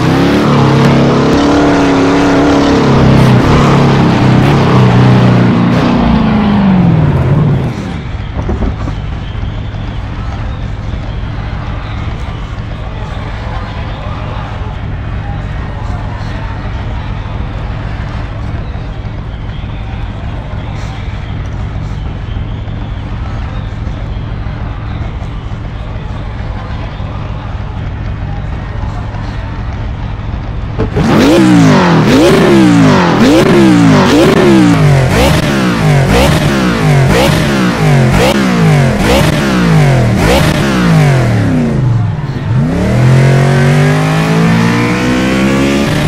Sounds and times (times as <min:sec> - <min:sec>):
Car: 0:00.0 - 0:46.0.